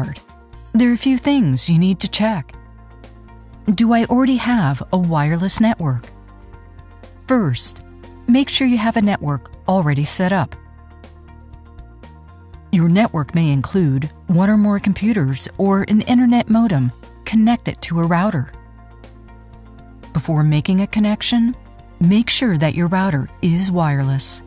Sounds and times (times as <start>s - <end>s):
Speech: 0.0s - 0.2s, 0.8s - 2.5s, 3.7s - 6.1s, 7.3s - 10.6s, 12.7s - 18.5s, 20.2s - 24.4s
Music: 0.0s - 24.4s.